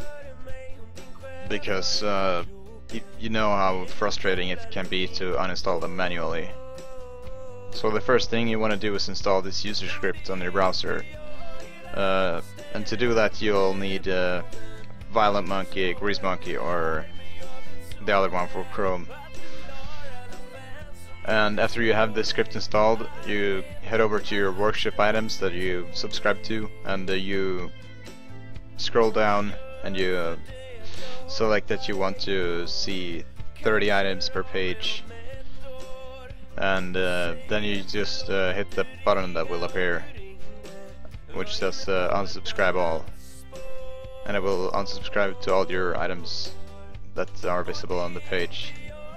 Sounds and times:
Music: 0:00.0 - 0:49.1
Speech: 0:01.4 - 0:06.6, 0:07.6 - 0:11.2, 0:11.9 - 0:17.1, 0:17.9 - 0:19.2, 0:21.3 - 0:27.7, 0:28.8 - 0:30.5, 0:31.3 - 0:35.1, 0:36.6 - 0:40.2, 0:41.3 - 0:43.1, 0:44.2 - 0:46.6, 0:47.2 - 0:48.9.

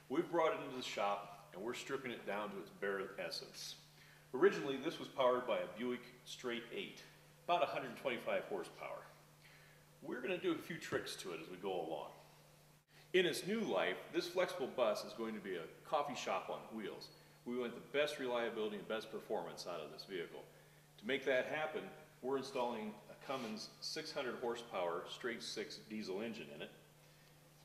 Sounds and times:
Speech: 0:00.1 - 0:09.2, 0:10.0 - 0:12.3, 0:13.1 - 0:26.8.

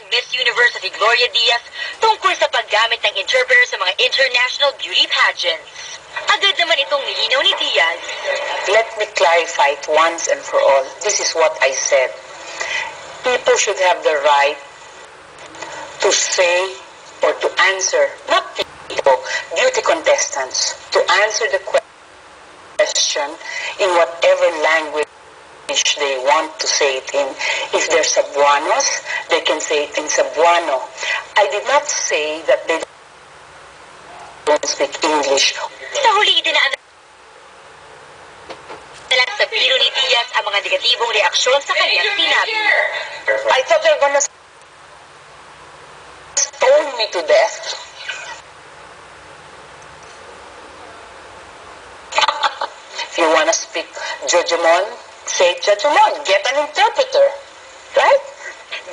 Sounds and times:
Speech: 0:00.0 - 0:12.2, 0:13.2 - 0:14.6, 0:16.0 - 0:21.8, 0:22.8 - 0:25.1, 0:25.7 - 0:32.9, 0:34.1 - 0:36.8, 0:39.1 - 0:44.3, 0:46.4 - 0:48.4, 0:52.2 - 0:57.4, 0:58.0 - 0:58.9.

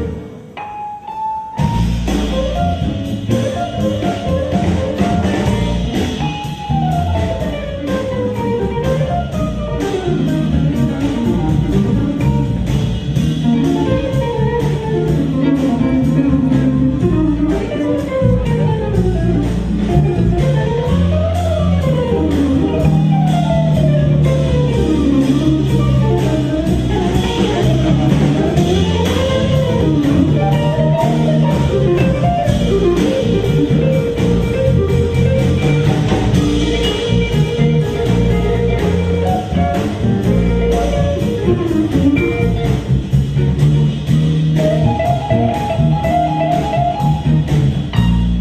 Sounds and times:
Electric guitar: 0:01.6 - 0:48.4
Strum: 0:01.6 - 0:48.4.

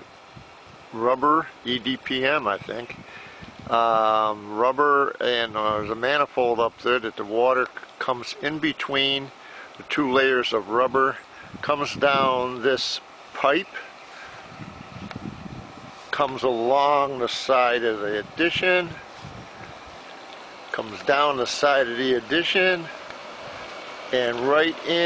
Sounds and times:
Speech: 0:00.9 - 0:03.0, 0:03.7 - 0:09.3, 0:09.9 - 0:13.9, 0:16.1 - 0:19.0, 0:20.7 - 0:23.0, 0:24.1 - 0:25.0.

